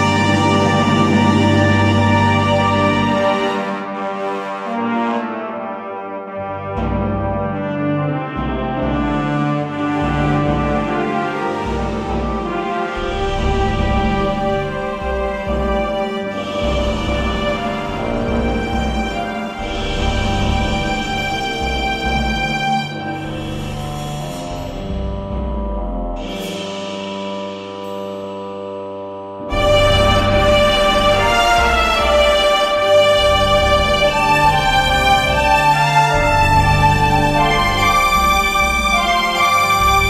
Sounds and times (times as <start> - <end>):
Background music: 0.0 - 40.1.